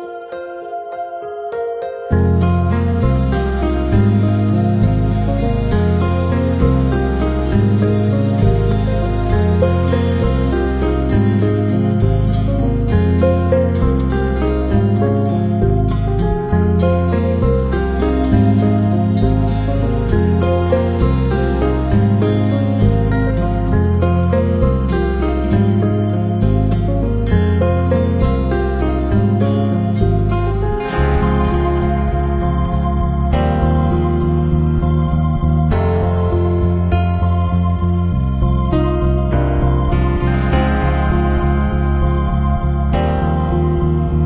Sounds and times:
Music: 0.0s - 44.2s.

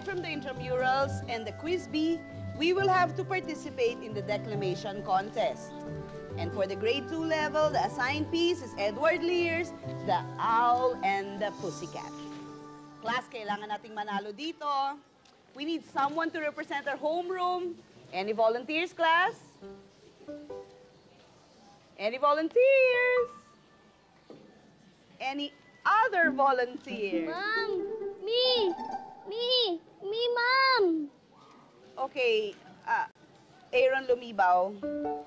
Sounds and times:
Music: 0.0s - 14.3s, 19.6s - 21.0s, 26.2s - 29.1s, 34.8s - 35.2s.

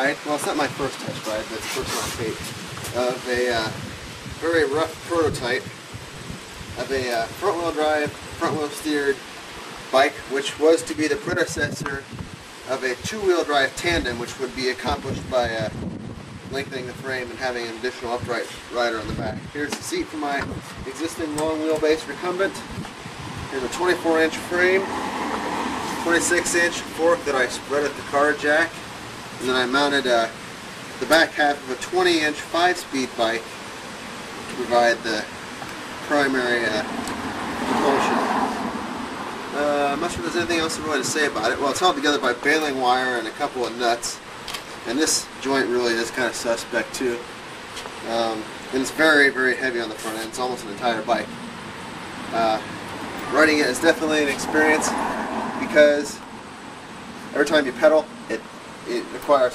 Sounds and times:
Speech: 0.0s - 3.8s, 4.4s - 5.7s, 6.8s - 9.2s, 9.9s - 12.1s, 12.7s - 15.8s, 16.5s - 22.7s, 23.5s - 24.9s, 26.0s - 28.8s, 29.4s - 30.4s, 31.0s - 33.4s, 34.5s - 35.3s, 36.0s - 36.9s, 37.7s - 38.2s, 39.5s - 44.2s, 44.8s - 47.3s, 48.0s - 51.3s, 52.3s - 55.0s, 55.6s - 56.2s, 57.3s - 59.5s
Vehicle: 0.0s - 59.5s.

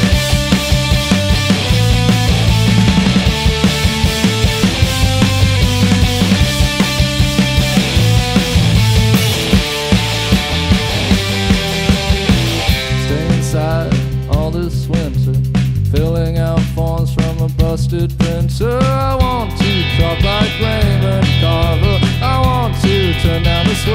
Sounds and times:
Singing: 16.0s - 23.9s.

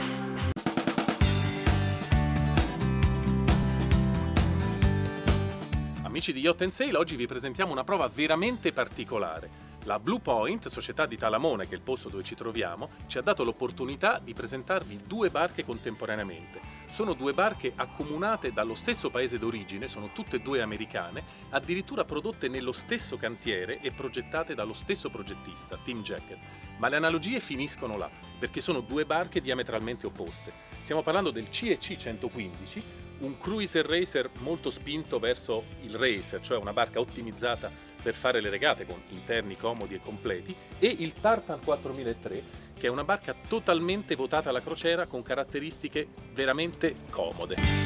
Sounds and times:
Music: 0.0s - 47.8s
Speech: 6.0s - 47.7s.

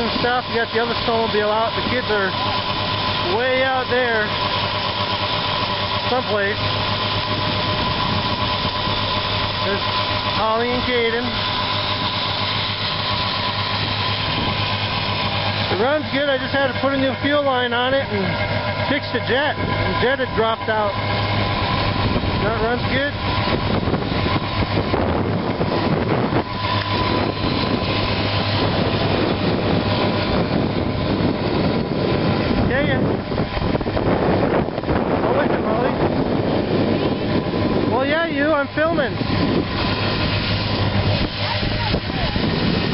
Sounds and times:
Speech: 0.0s - 2.4s, 3.2s - 4.3s, 6.1s - 6.6s, 9.6s - 11.4s, 15.7s - 21.0s, 22.4s - 23.2s, 32.7s - 33.0s, 37.9s - 39.2s, 41.4s - 42.4s.

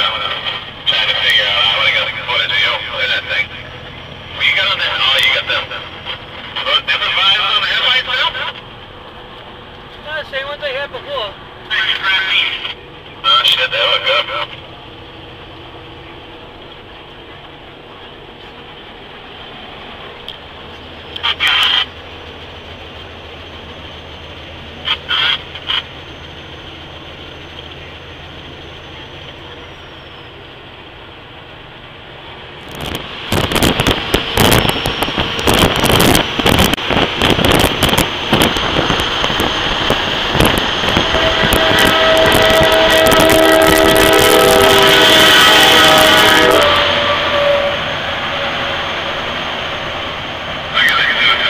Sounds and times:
Vehicle: 0.0s - 51.5s.

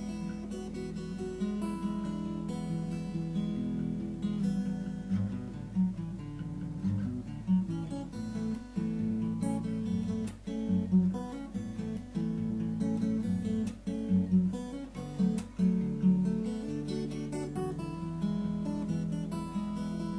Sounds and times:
Acoustic guitar: 0.0s - 20.1s.

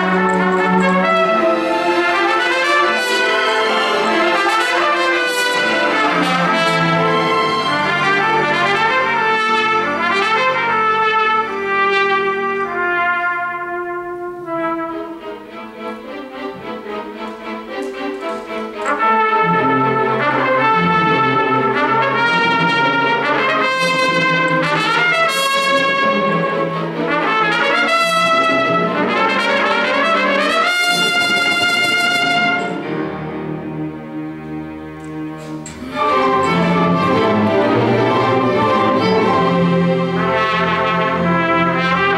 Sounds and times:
Cello: 0.0s - 42.1s
Violin, fiddle: 14.8s - 27.2s, 27.8s - 42.1s.

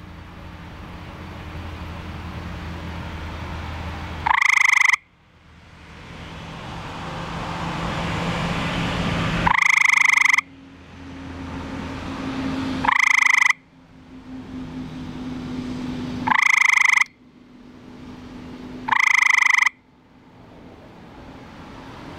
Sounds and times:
Frog: 4.2s - 5.0s, 9.5s - 10.5s, 12.8s - 13.6s, 16.3s - 17.2s, 18.9s - 19.8s.

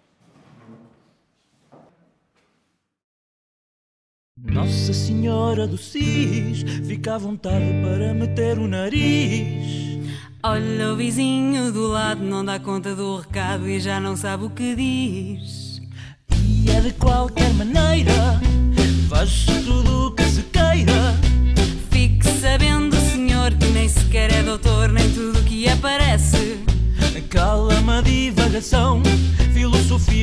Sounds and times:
Pop music: 16.4s - 30.2s.

